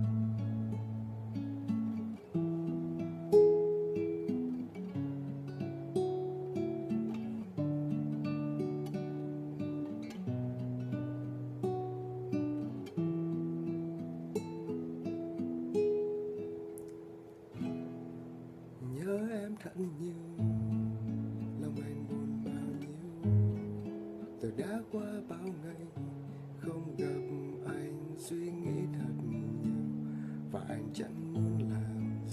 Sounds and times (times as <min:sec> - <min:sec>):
Strum: 0:00.0 - 0:32.3.